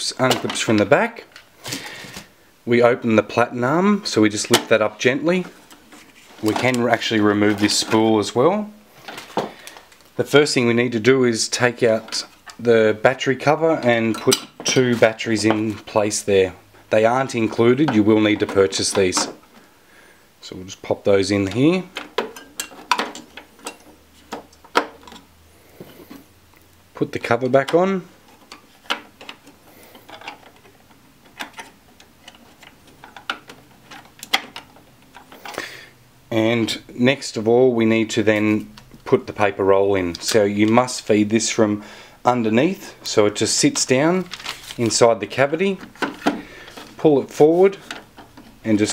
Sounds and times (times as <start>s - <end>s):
Speech: 0.0s - 1.3s, 2.7s - 5.6s, 6.4s - 8.8s, 10.2s - 19.4s, 20.4s - 21.9s, 27.0s - 28.1s, 36.3s - 45.9s, 47.0s - 47.8s, 48.6s - 48.9s.